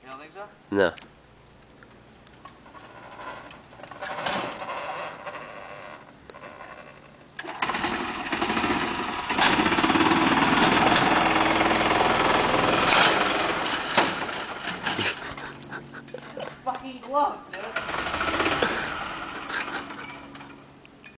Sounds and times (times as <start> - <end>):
Vehicle: 1.6 - 21.1.